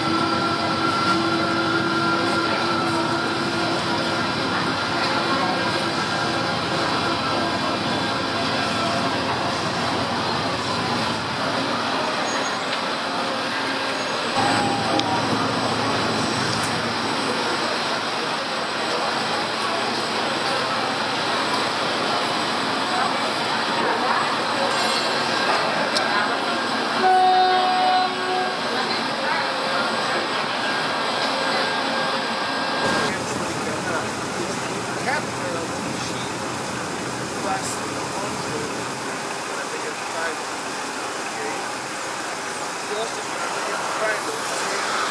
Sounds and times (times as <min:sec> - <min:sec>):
Train: 0:00.0 - 0:45.1.